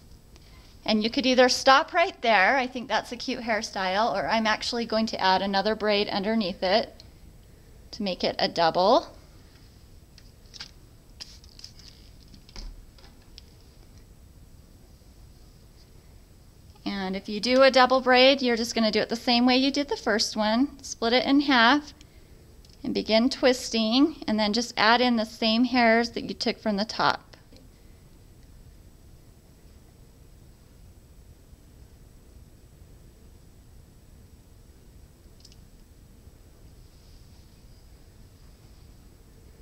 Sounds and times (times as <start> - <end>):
Inside, small room: 0.0 - 39.6
Speech: 0.9 - 7.0, 8.0 - 9.2, 16.8 - 22.0, 22.8 - 27.4.